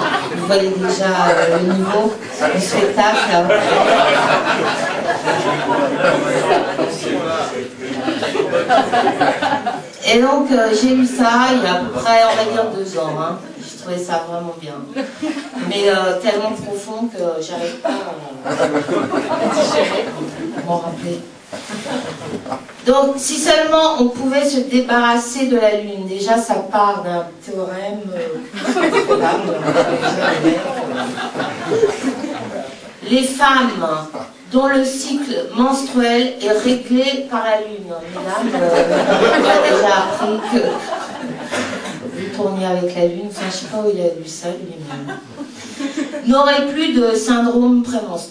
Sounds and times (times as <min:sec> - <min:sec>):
Speech: 0:00.0 - 0:04.0, 0:09.8 - 0:21.3, 0:22.9 - 0:41.0, 0:42.1 - 0:45.2, 0:46.2 - 0:48.3.